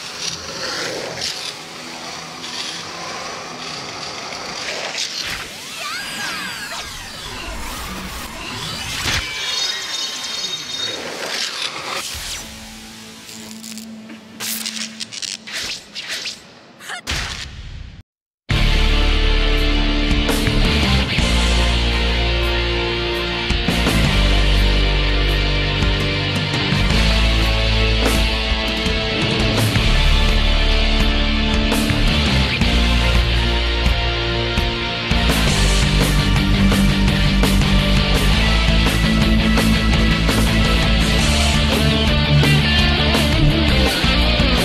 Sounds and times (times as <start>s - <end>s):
Blues: 19.4s - 44.6s.